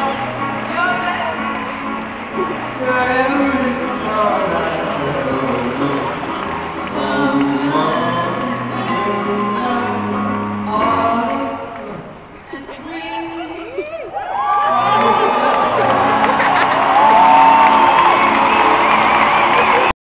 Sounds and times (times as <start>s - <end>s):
Music: 0.0s - 12.5s, 14.5s - 19.9s
Male singing: 2.7s - 12.8s.